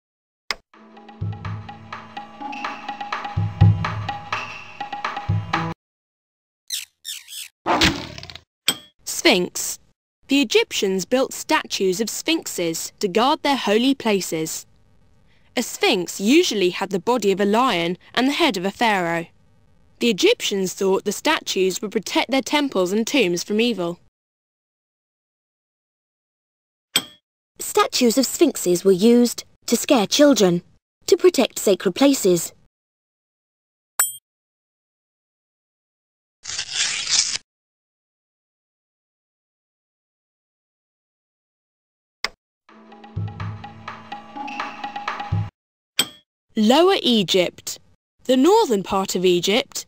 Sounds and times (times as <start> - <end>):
Speech: 9.1 - 14.7, 15.6 - 19.3, 20.0 - 24.0, 27.6 - 32.6, 46.6 - 49.8.